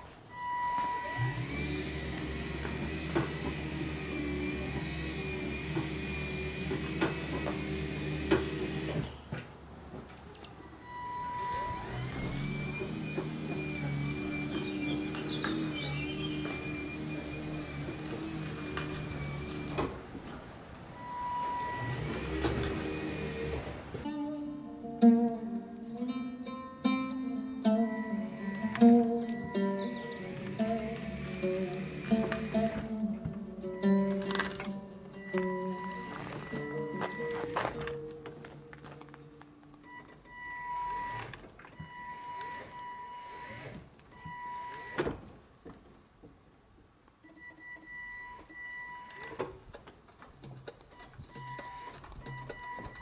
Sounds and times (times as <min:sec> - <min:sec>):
Music: 0:24.1 - 0:39.6.